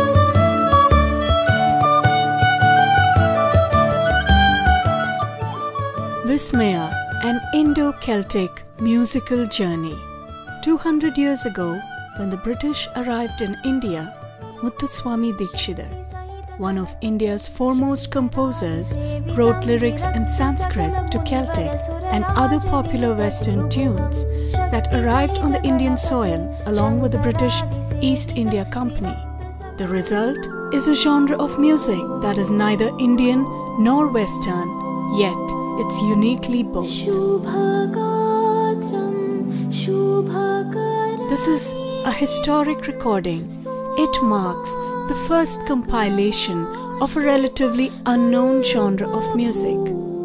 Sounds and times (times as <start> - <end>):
Music: 0.0 - 50.2
Speech: 6.2 - 10.0, 10.6 - 16.0, 16.6 - 29.2, 29.8 - 37.3, 41.3 - 50.0.